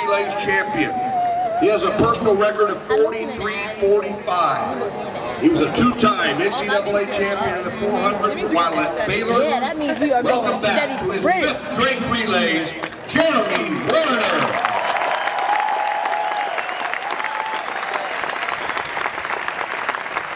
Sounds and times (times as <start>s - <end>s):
Outside, urban or manmade: 0.0s - 20.3s.